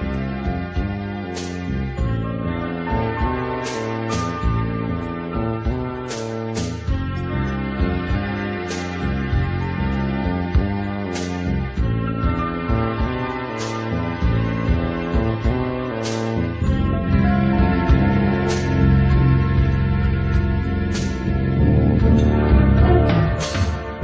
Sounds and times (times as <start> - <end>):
Music: 0.0 - 24.0.